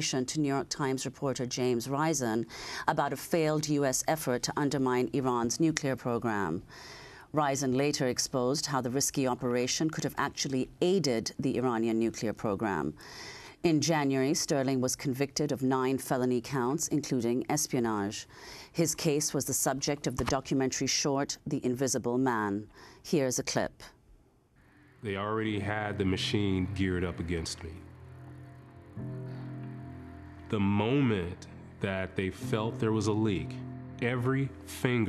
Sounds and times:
Speech: 0:00.0 - 0:06.6, 0:07.4 - 0:13.0, 0:13.6 - 0:18.2, 0:18.8 - 0:24.0, 0:25.1 - 0:27.8, 0:30.6 - 0:35.0.

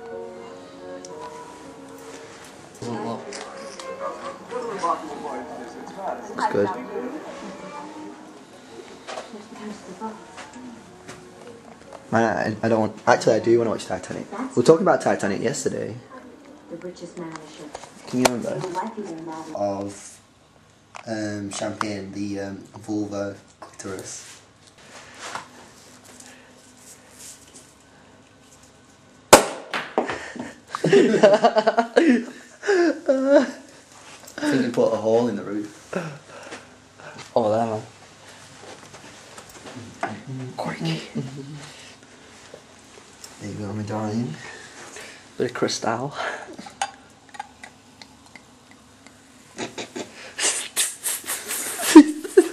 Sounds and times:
Inside, small room: 0:00.0 - 0:52.5.

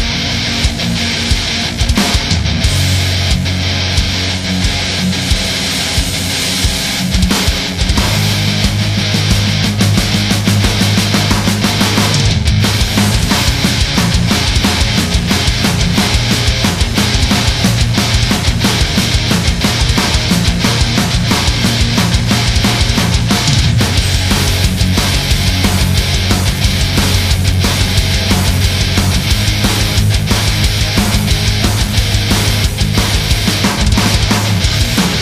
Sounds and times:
Music: 0:00.0 - 0:35.2.

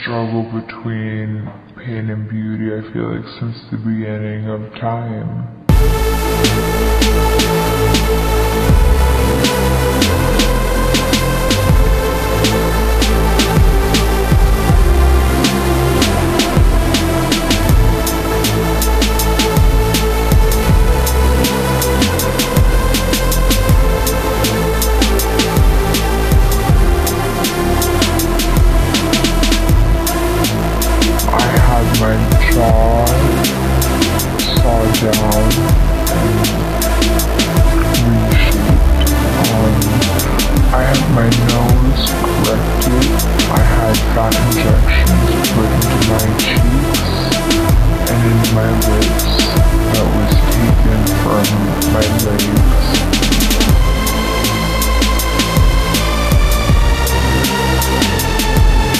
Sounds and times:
Music: 0:00.0 - 0:58.9.

